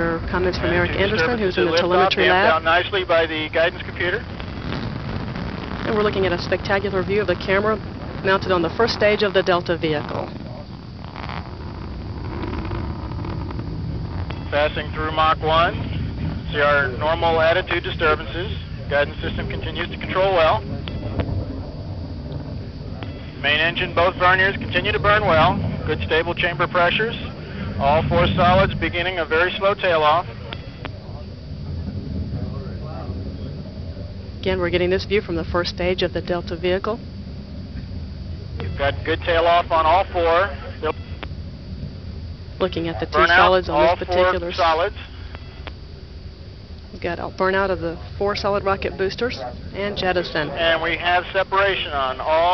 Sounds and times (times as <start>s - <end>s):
Speech: 0.0s - 4.2s, 5.9s - 10.6s, 16.6s - 20.7s, 42.6s - 45.0s, 47.0s - 52.5s.